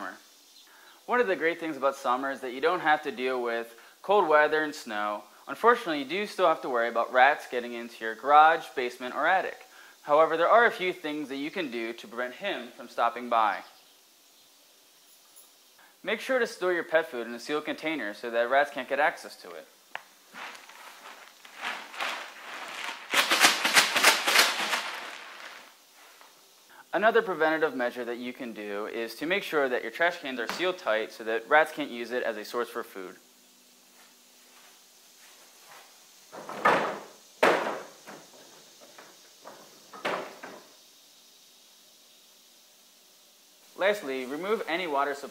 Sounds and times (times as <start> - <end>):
Speech: 0.0 - 0.2, 1.1 - 13.7, 16.0 - 19.7, 26.9 - 33.2, 43.8 - 45.3.